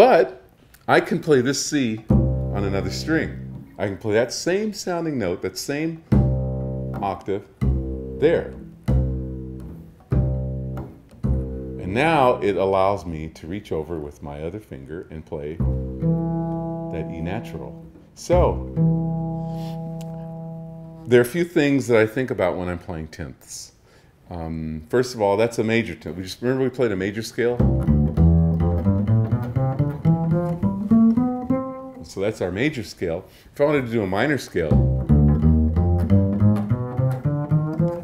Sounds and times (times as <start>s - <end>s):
Speech: 0.0s - 6.0s, 7.0s - 7.5s, 8.2s - 8.6s, 11.8s - 15.6s, 16.9s - 18.6s, 21.1s - 27.6s, 32.0s - 34.8s
Bowed string instrument: 2.0s - 4.0s, 6.1s - 13.0s, 15.5s - 21.1s, 27.6s - 32.2s, 34.5s - 38.0s.